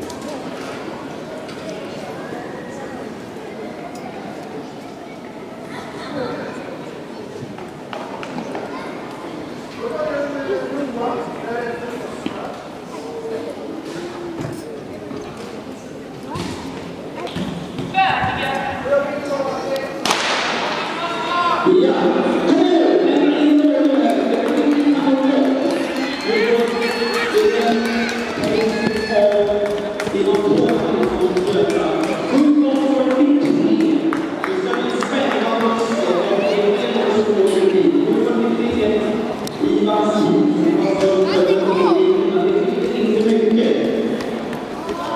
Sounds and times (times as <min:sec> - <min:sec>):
Speech: 0:20.9 - 0:44.1
Run: 0:23.8 - 0:36.0.